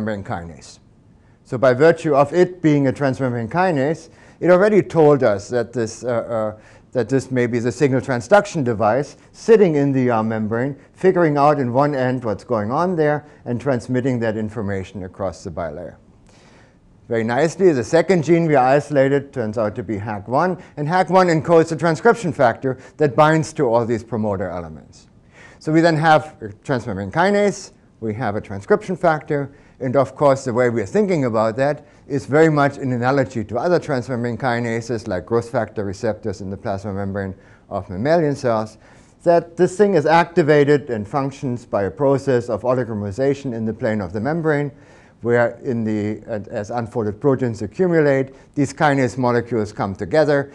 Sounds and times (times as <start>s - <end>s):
Speech: 0.0s - 16.0s, 17.1s - 50.5s.